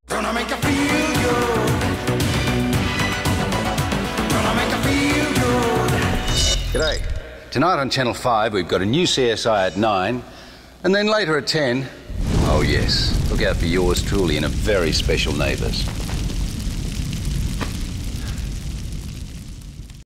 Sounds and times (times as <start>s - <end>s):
Speech: 6.8s - 15.9s
Eruption: 12.1s - 20.0s.